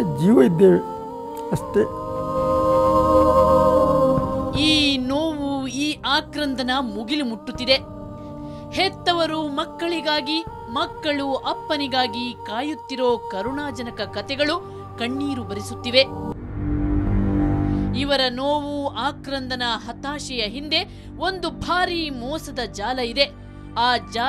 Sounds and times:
Music: 0.0 - 24.2.

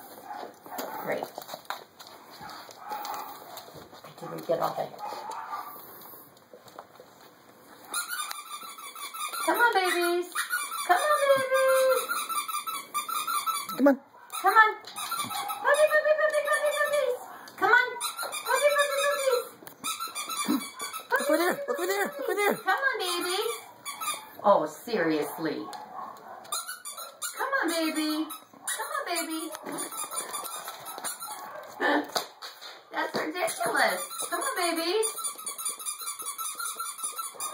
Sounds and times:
Dog: 0.0 - 6.3, 7.7 - 24.4, 25.1 - 32.8, 33.5 - 37.5
Speech: 4.2 - 5.0, 9.5 - 12.1, 15.6 - 19.5, 24.4 - 25.7, 27.4 - 29.6, 32.9 - 35.1.

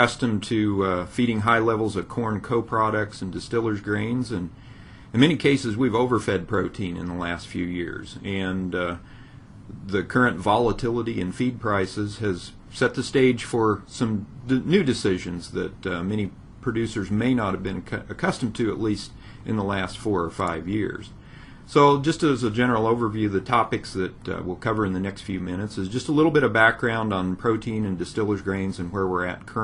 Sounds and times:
Speech: 0.0 - 9.1, 9.7 - 29.6.

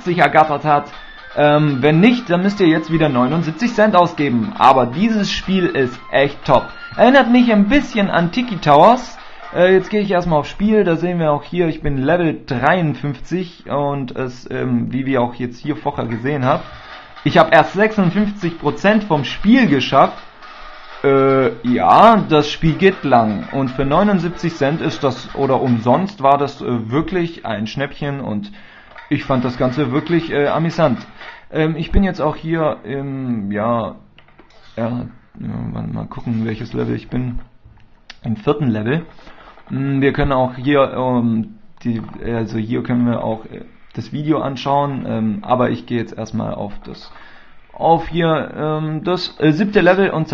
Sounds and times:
Speech: 0.0 - 20.2, 21.0 - 37.5, 38.1 - 50.3.

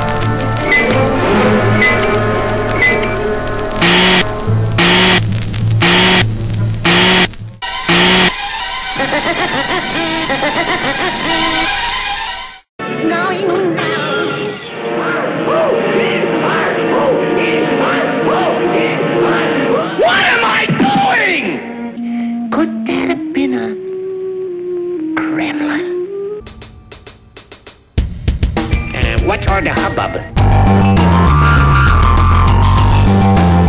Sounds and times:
Music: 0.0 - 5.8, 6.4 - 33.6.

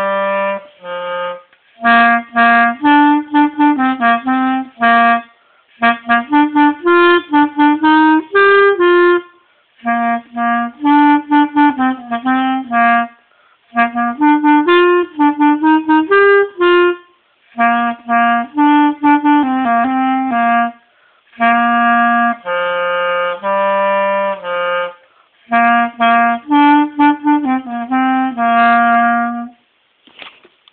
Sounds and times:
Music: 0.0 - 29.6.

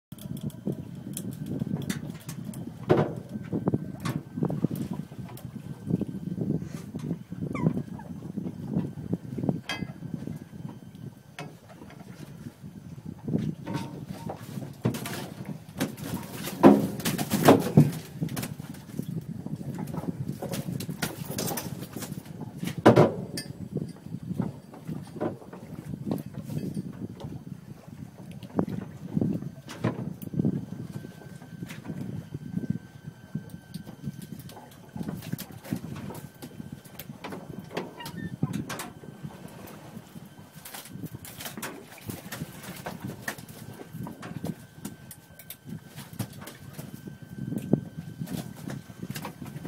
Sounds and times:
Boat, Water vehicle: 0.1 - 49.6
Outside, rural or natural: 0.1 - 49.6
Animal: 7.5 - 8.2.

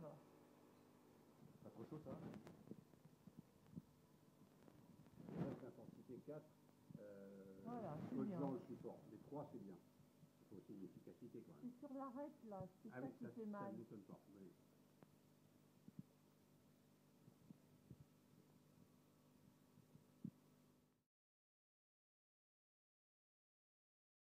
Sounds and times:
Speech: 1.6 - 2.4, 5.4 - 6.4, 7.0 - 9.8, 10.5 - 14.6.

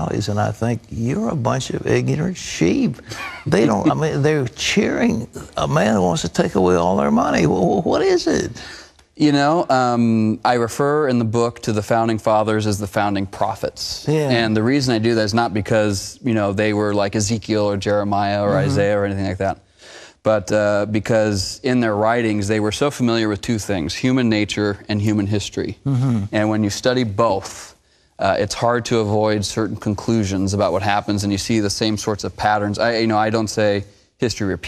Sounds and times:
Speech: 0.0 - 8.6, 9.2 - 19.6, 20.3 - 34.6.

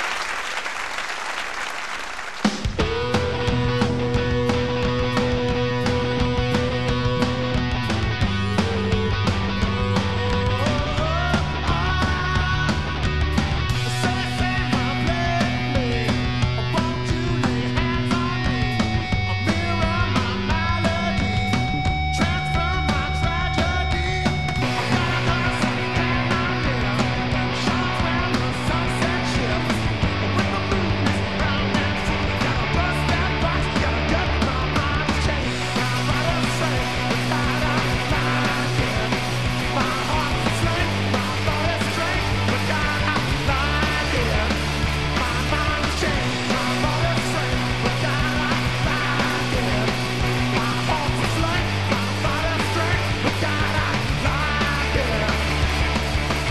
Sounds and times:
Music: 2.4 - 56.5.

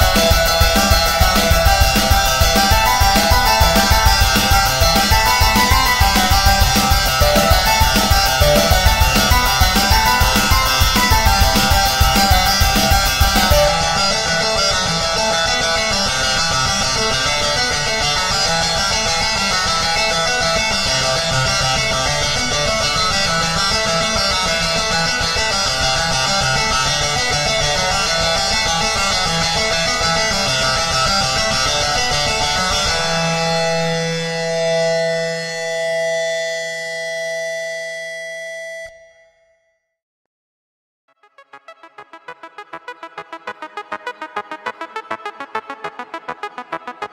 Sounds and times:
Siren: 0.0 - 16.2, 33.3 - 39.7.

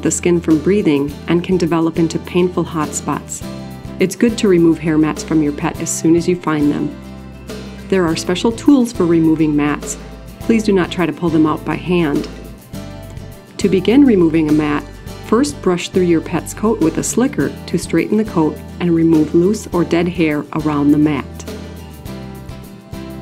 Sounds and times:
Speech: 0.0 - 3.4, 4.0 - 7.0, 7.9 - 12.4, 13.6 - 21.5
Music: 0.0 - 23.2.

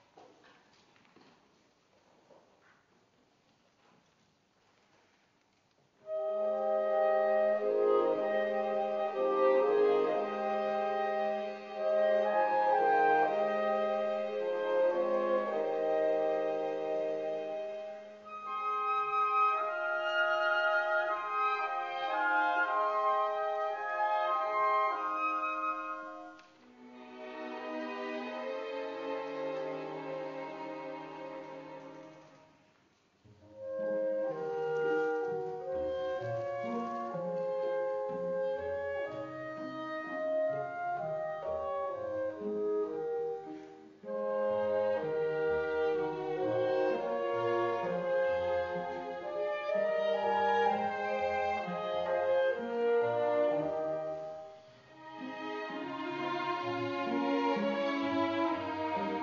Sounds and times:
Orchestra: 3.3 - 59.2
Bowed string instrument: 5.5 - 59.2.

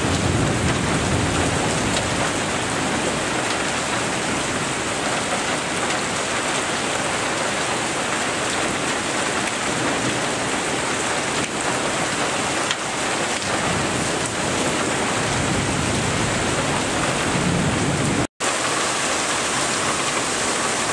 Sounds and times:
Thunderstorm: 0.0 - 6.8, 8.5 - 18.3
Rain: 0.0 - 20.9.

